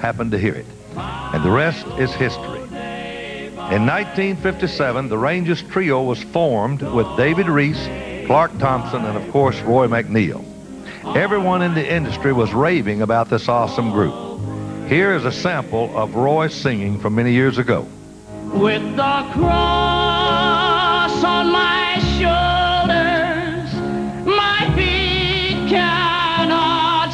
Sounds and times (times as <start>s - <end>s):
Speech: 0.0s - 0.7s, 1.4s - 2.6s, 3.7s - 10.4s, 11.1s - 14.2s, 14.9s - 17.9s
Music: 0.0s - 27.1s.